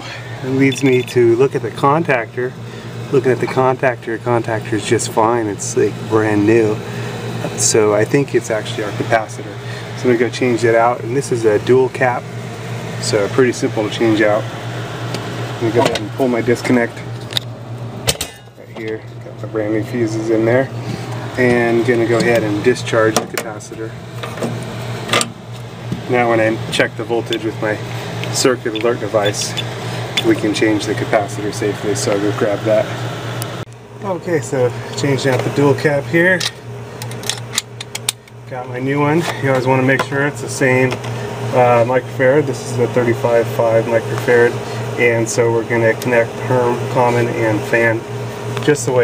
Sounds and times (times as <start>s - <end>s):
Speech: 0.0s - 12.3s, 13.0s - 14.5s, 15.6s - 17.1s, 18.6s - 20.8s, 21.4s - 24.0s, 26.0s - 29.6s, 30.2s - 33.0s, 34.0s - 36.6s, 38.5s - 49.0s.